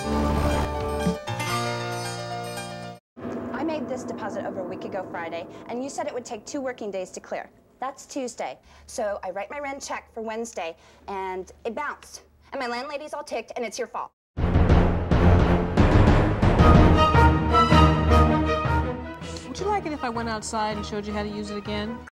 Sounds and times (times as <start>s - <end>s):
Music: 0.0s - 3.0s, 14.4s - 22.1s
Speech: 3.5s - 14.2s, 19.3s - 22.0s.